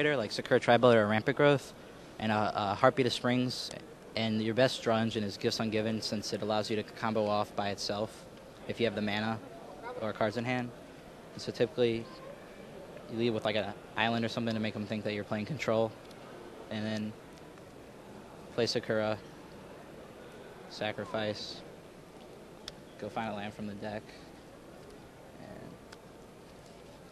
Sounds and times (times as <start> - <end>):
Speech: 0.0 - 10.7, 11.4 - 12.2, 13.1 - 16.0, 16.7 - 17.2, 18.5 - 19.2, 20.7 - 21.6, 23.0 - 24.2, 25.4 - 25.8.